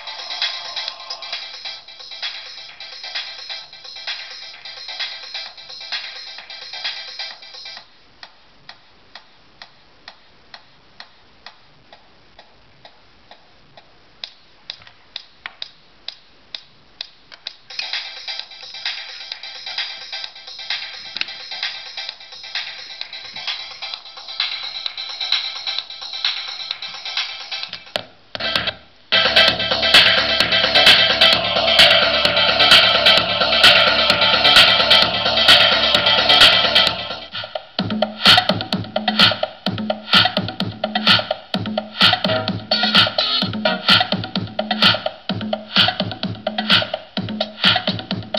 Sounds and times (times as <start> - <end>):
Music: 0.0 - 48.3.